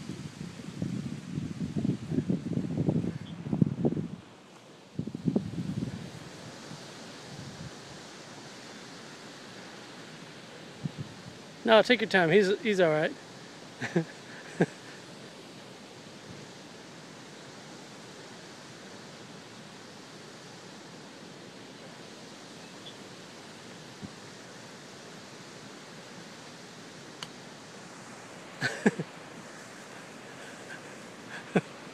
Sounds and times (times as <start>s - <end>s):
Speech: 11.6s - 13.2s.